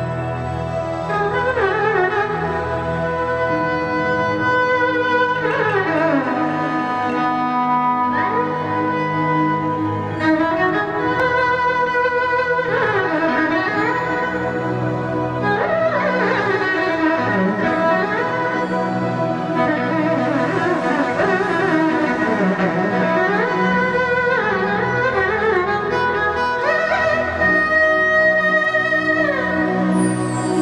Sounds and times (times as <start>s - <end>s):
String section: 0.0s - 30.6s.